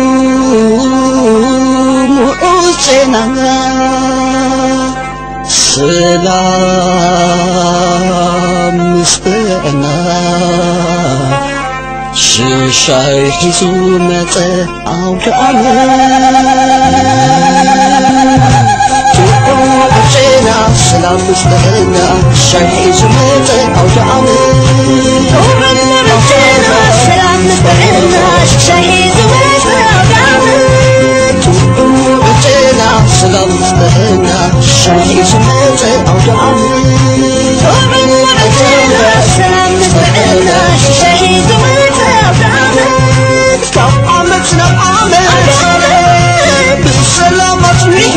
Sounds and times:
Folk music: 0.0s - 48.1s.

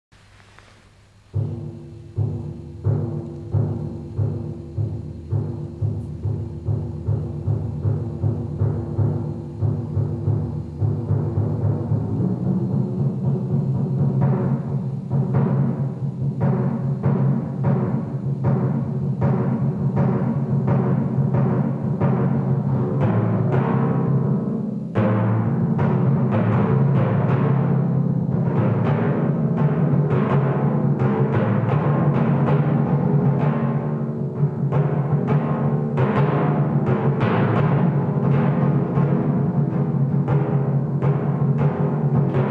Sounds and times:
Timpani: 0.2s - 42.5s.

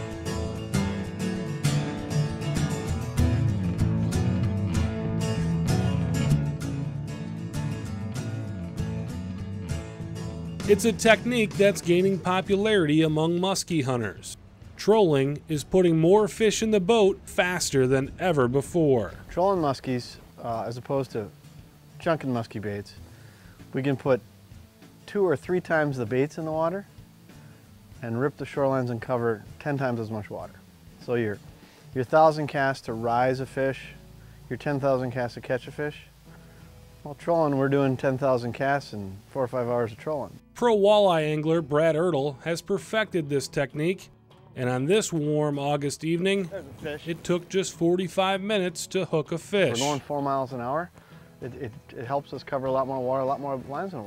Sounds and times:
Music: 0.0s - 54.0s
Speech: 10.6s - 21.3s, 22.0s - 23.0s, 23.7s - 24.2s, 25.1s - 26.9s, 28.0s - 31.4s, 32.0s - 36.1s, 37.1s - 54.0s.

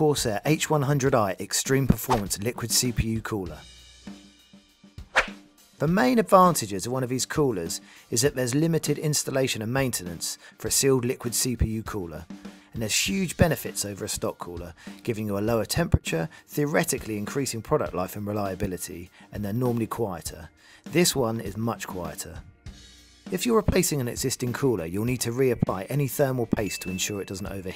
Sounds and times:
Speech: 0.0s - 3.7s, 5.8s - 22.4s, 23.3s - 27.7s
Music: 0.0s - 27.7s.

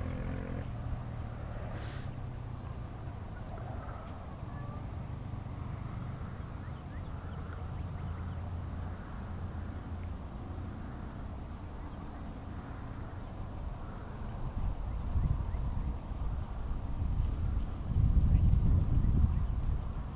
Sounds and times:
Outside, urban or manmade: 0.0s - 20.1s.

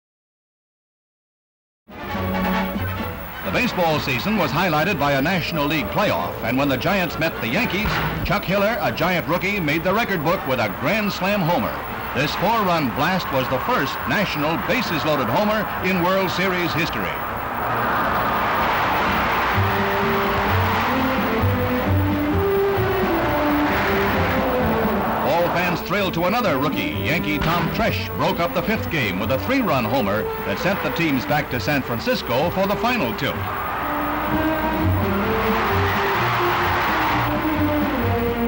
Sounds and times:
Music: 1.9s - 17.2s, 18.2s - 38.4s
Speech: 3.4s - 17.3s, 25.2s - 33.4s.

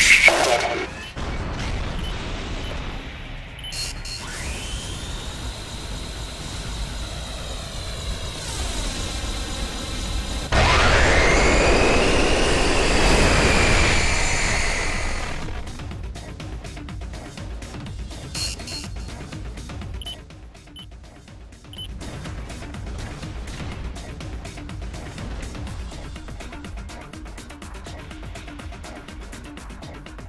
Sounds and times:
Music: 0.0s - 5.6s, 15.4s - 30.2s.

